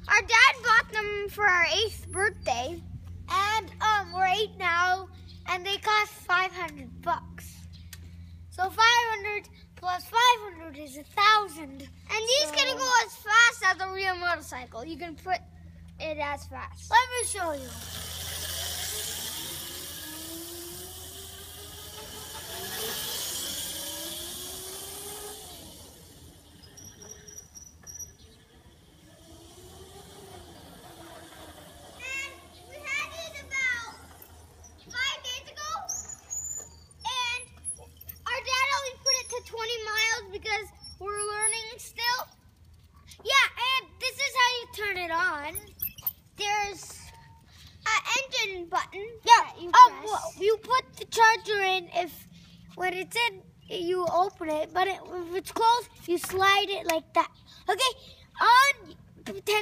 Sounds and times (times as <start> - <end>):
Speech: 8.6 - 15.4, 47.9 - 52.1.